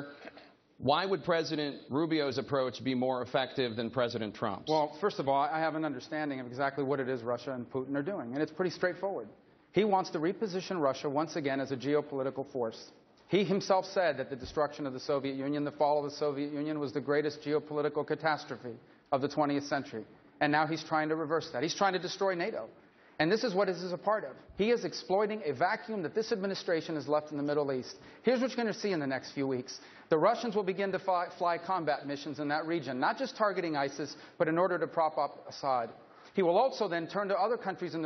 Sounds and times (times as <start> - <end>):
Speech: 0.0 - 38.0.